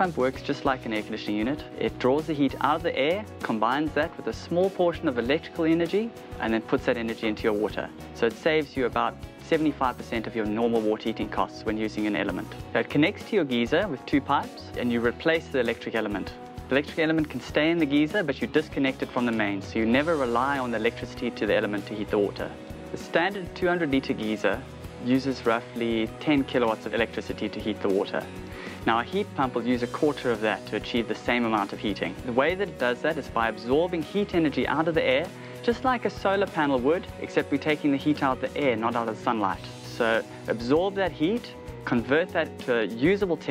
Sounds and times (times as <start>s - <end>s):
Music: 0.0s - 43.5s
Speech: 0.0s - 43.5s.